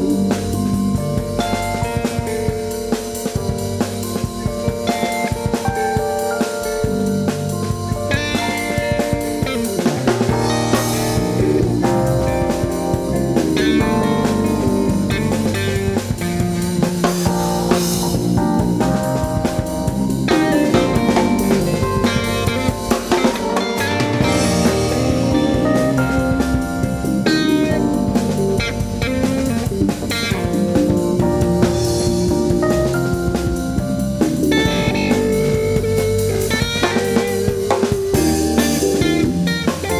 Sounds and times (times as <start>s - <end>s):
Music: 0.0s - 40.0s.